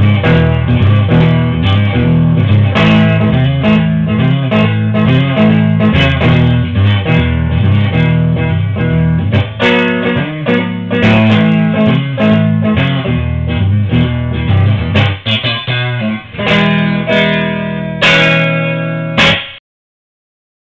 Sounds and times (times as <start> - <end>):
Strum: 0.0 - 19.6.